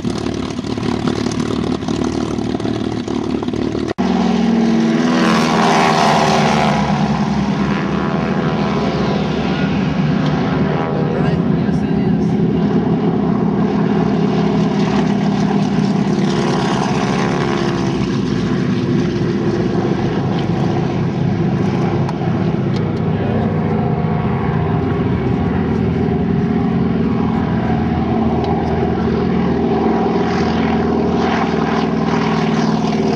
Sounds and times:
Fixed-wing aircraft, airplane: 0.0 - 33.1
Outside, urban or manmade: 0.0 - 33.1
Propeller, airscrew: 0.0 - 33.1.

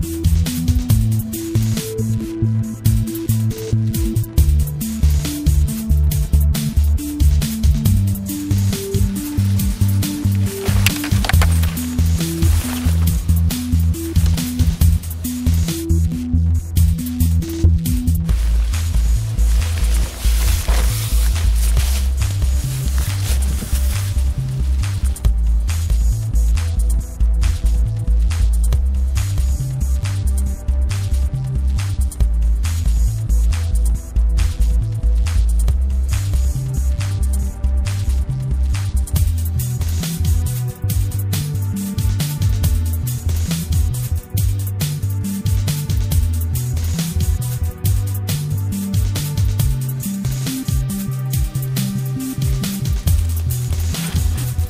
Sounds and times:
Music: 0.0 - 54.6.

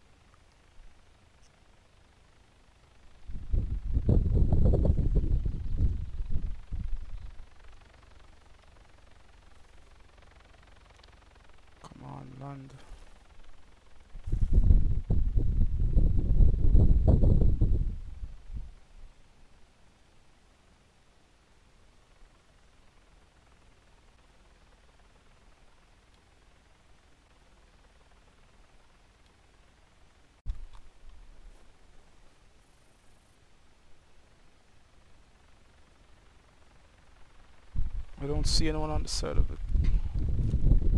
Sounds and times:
Speech: 11.8 - 12.9, 38.2 - 39.6.

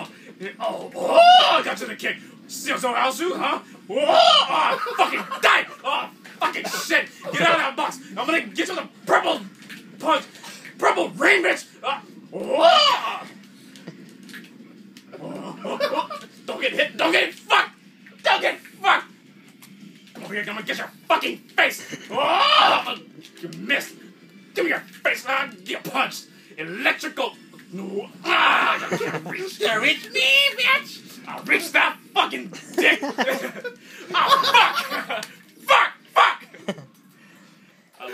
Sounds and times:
Speech: 0.0 - 12.0, 16.5 - 19.1, 20.2 - 24.0, 24.6 - 33.0, 35.6 - 36.5.

